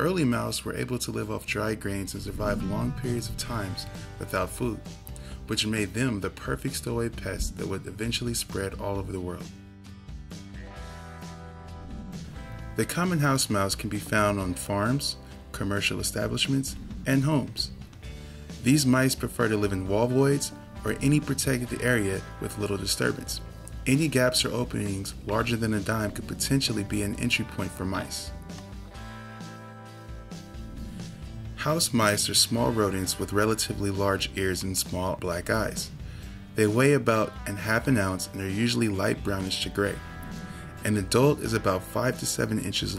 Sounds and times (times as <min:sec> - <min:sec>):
Speech: 0:00.0 - 0:04.9, 0:05.5 - 0:09.6, 0:12.8 - 0:17.8, 0:18.6 - 0:28.4, 0:31.6 - 0:35.9, 0:36.6 - 0:40.0, 0:40.8 - 0:42.9
Music: 0:00.0 - 0:42.9.